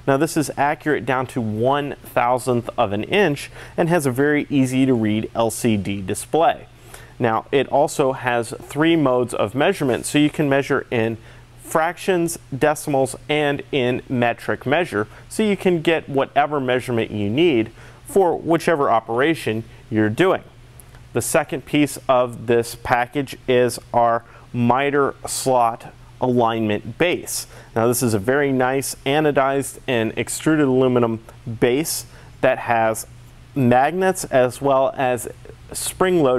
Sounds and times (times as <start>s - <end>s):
Speech: 0.1s - 36.3s.